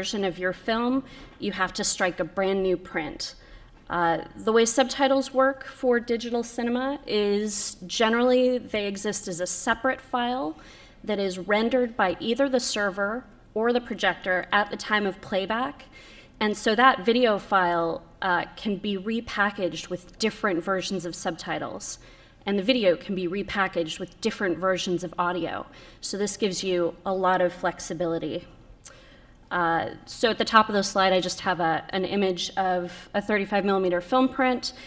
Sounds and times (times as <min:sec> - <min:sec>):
Speech: 0:00.0 - 0:28.5, 0:29.5 - 0:34.8.